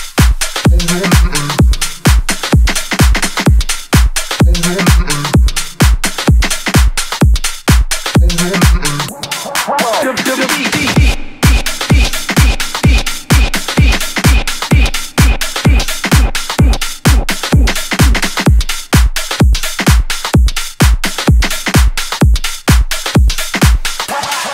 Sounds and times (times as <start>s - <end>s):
Electronic dance music: 0.0s - 24.5s
House music: 0.0s - 24.5s.